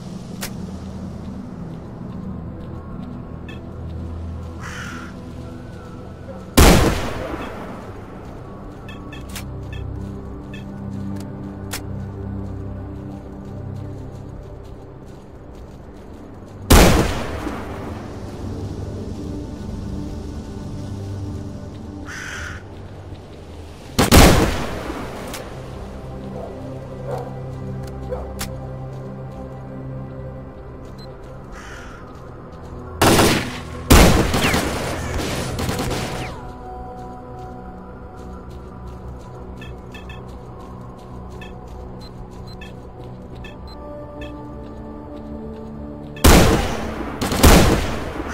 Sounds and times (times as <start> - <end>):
Fusillade: 33.0 - 36.4.